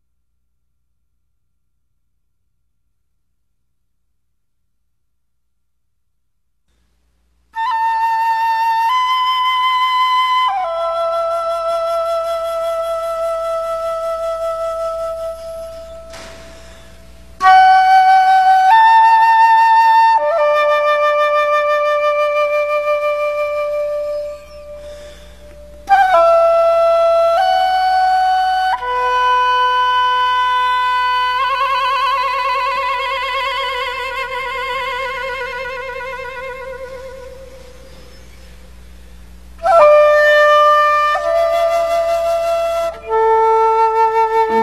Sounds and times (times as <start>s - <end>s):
Flute: 7.6s - 38.9s, 39.6s - 44.6s.